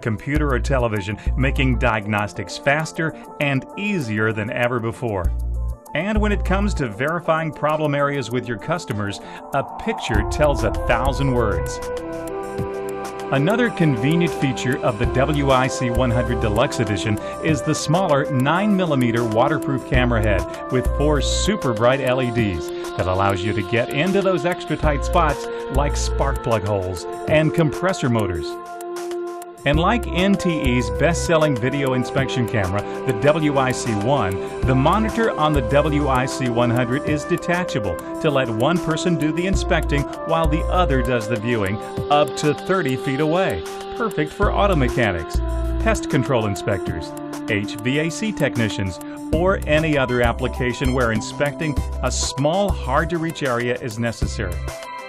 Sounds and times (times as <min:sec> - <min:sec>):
Speech: 0:00.0 - 0:05.3, 0:05.9 - 0:11.9, 0:13.3 - 0:28.6, 0:29.7 - 0:54.7
Music: 0:00.0 - 0:55.0.